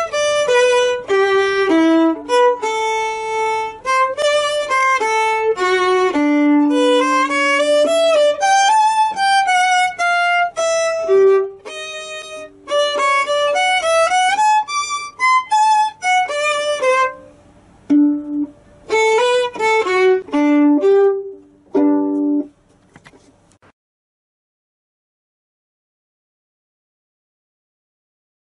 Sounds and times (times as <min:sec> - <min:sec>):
Violin, fiddle: 0:00.0 - 0:17.3, 0:18.2 - 0:22.5.